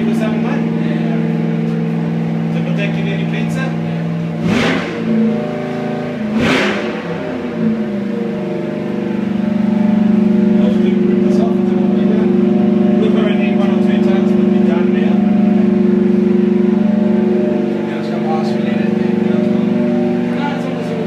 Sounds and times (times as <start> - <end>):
Speech: 0.0 - 1.4, 2.5 - 4.1, 10.5 - 15.3, 17.7 - 21.0
Idling: 0.0 - 21.0
Medium engine (mid frequency): 0.0 - 21.0.